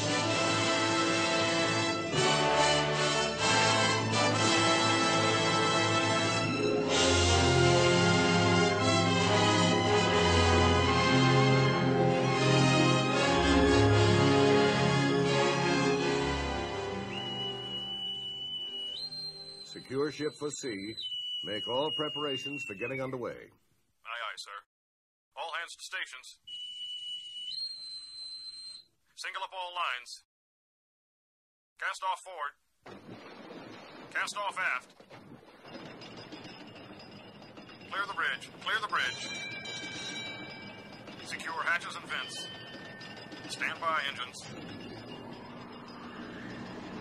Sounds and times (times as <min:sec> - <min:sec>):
Narration, monologue: 0:19.7 - 0:24.7, 0:25.4 - 0:26.7, 0:29.0 - 0:30.3, 0:31.8 - 0:47.0.